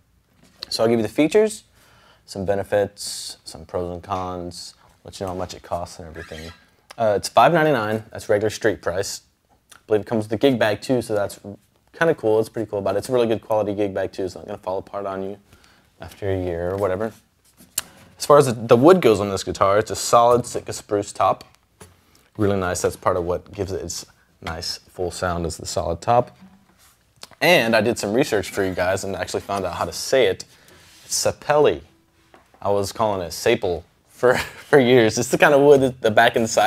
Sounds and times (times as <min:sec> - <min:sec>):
Speech: 0:00.6 - 0:01.7, 0:02.3 - 0:17.3, 0:18.2 - 0:21.6, 0:22.4 - 0:26.4, 0:27.2 - 0:32.0, 0:32.6 - 0:36.6.